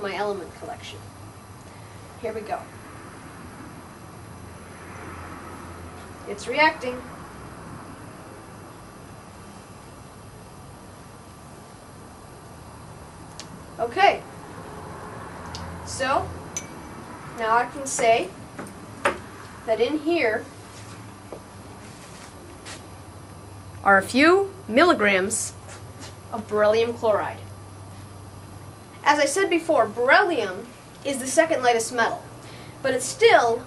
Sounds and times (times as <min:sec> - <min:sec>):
Speech: 0:00.0 - 0:01.0, 0:02.2 - 0:02.7, 0:06.3 - 0:07.1, 0:13.8 - 0:14.2, 0:15.9 - 0:16.3, 0:17.4 - 0:18.4, 0:19.7 - 0:20.5, 0:23.8 - 0:25.6, 0:26.3 - 0:27.5, 0:29.0 - 0:33.6.